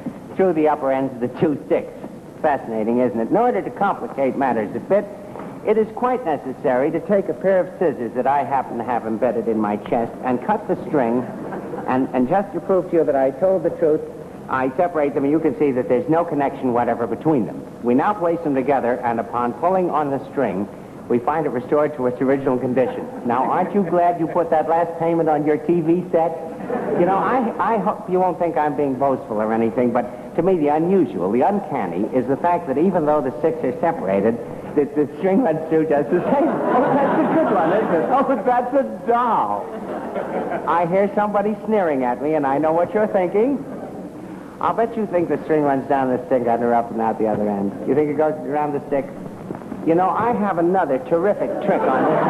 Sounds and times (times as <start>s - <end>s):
Male speech, man speaking: 0.4s - 26.4s, 27.0s - 39.7s, 40.7s - 43.7s, 44.6s - 49.2s, 49.8s - 52.3s.